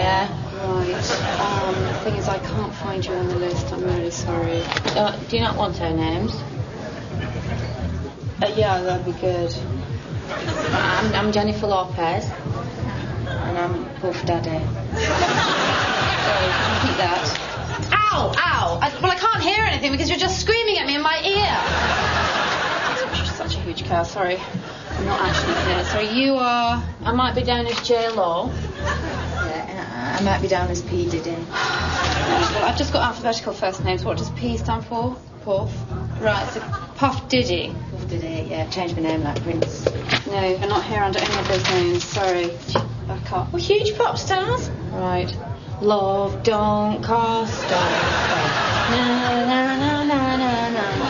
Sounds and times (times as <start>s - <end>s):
Music: 0.0s - 51.1s.